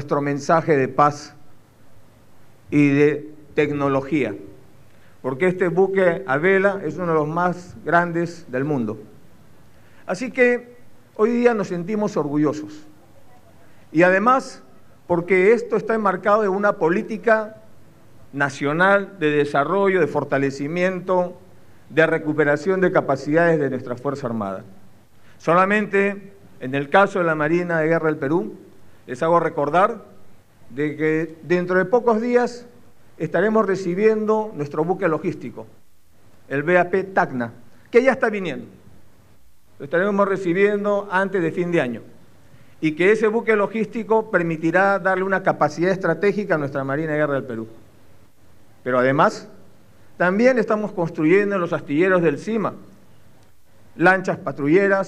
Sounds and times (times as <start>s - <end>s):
Speech: 0.0s - 1.4s, 2.7s - 4.5s, 5.3s - 9.1s, 10.1s - 17.6s, 18.3s - 24.7s, 25.4s - 30.1s, 30.7s - 35.7s, 36.5s - 38.8s, 39.8s - 42.1s, 42.8s - 47.8s, 48.8s - 49.6s, 50.2s - 52.8s, 54.0s - 55.0s.